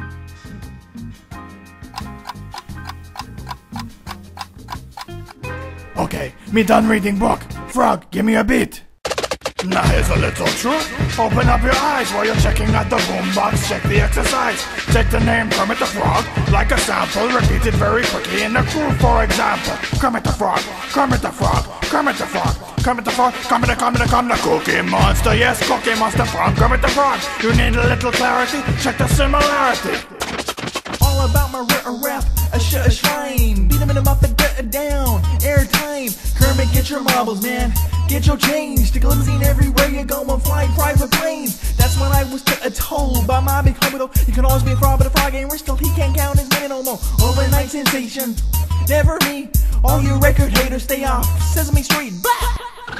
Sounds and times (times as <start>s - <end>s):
Music: 0.0s - 8.0s, 9.0s - 53.0s.